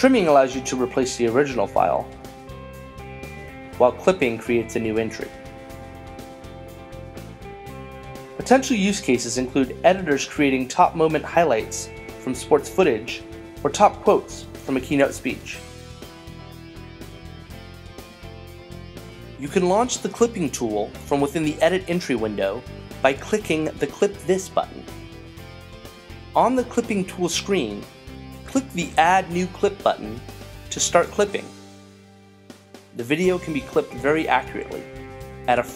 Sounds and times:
Speech: 0.0 - 2.1, 3.8 - 5.4, 8.4 - 15.6, 19.4 - 24.9, 26.4 - 27.9, 28.5 - 31.5, 33.0 - 34.9, 35.5 - 35.7
Music: 0.0 - 35.7.

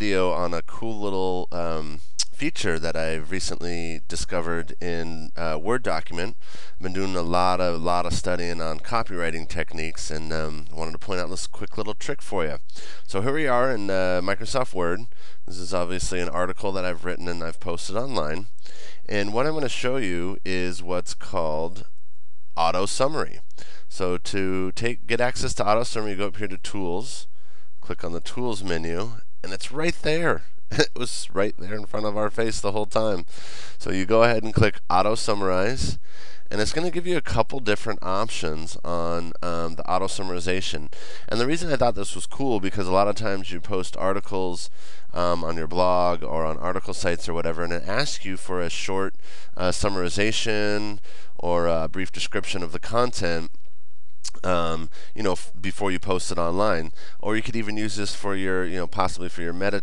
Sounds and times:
Speech: 0.0 - 21.9, 22.6 - 53.6, 54.3 - 59.8.

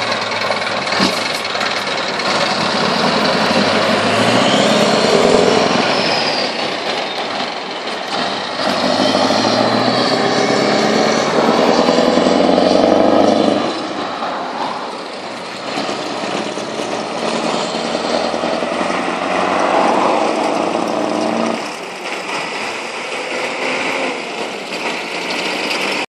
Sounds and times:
Clatter: 0.0 - 14.1, 14.9 - 26.0.

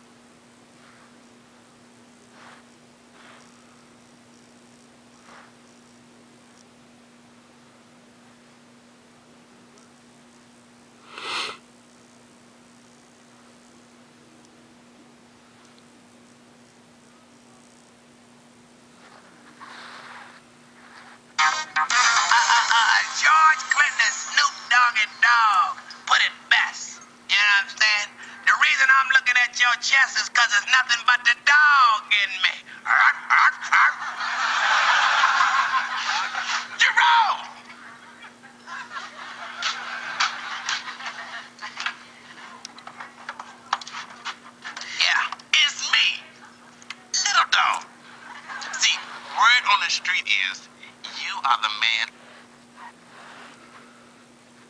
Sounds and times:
Speech: 22.7 - 34.1, 36.8 - 38.2, 44.9 - 46.4, 47.0 - 47.9, 48.8 - 52.2.

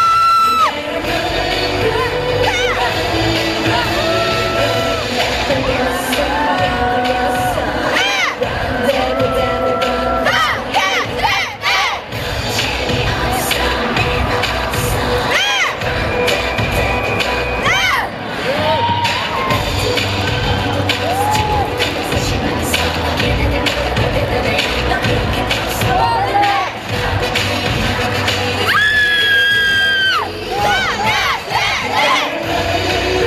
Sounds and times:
Inside, large room or hall: 0.0 - 33.2
Music: 0.0 - 33.2
Singing: 0.0 - 33.2.

